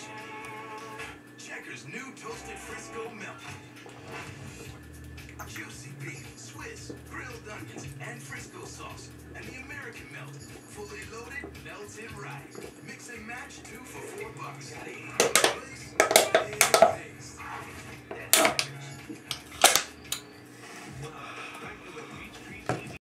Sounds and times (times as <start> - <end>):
Speech: 1.4 - 3.6, 5.4 - 17.4, 21.0 - 23.0.